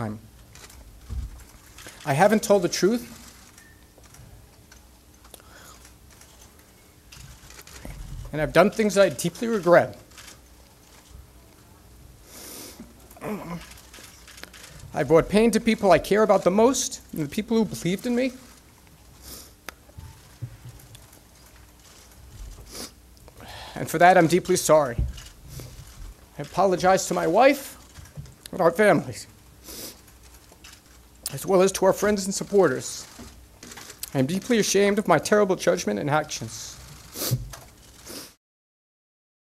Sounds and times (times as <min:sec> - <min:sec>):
Speech: 0:02.1 - 0:03.1, 0:15.0 - 0:18.4, 0:26.4 - 0:27.8, 0:28.5 - 0:29.3, 0:31.3 - 0:33.1, 0:34.1 - 0:36.8.